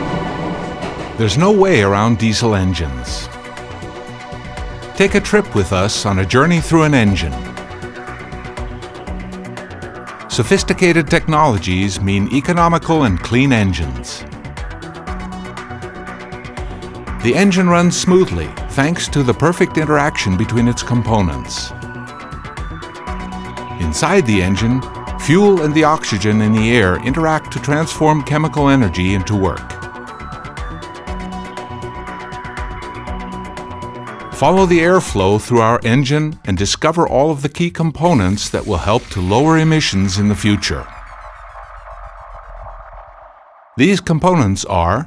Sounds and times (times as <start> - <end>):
Music: 0.0 - 45.0
Speech: 1.2 - 3.3, 5.0 - 7.4, 10.3 - 14.3, 17.2 - 21.8, 23.8 - 29.7, 34.4 - 40.9, 43.8 - 45.0.